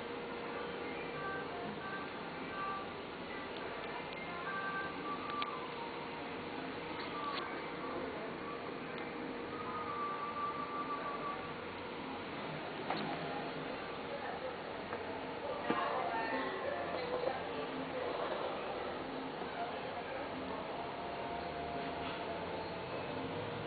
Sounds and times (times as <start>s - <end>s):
Speech: 13.7s - 21.1s.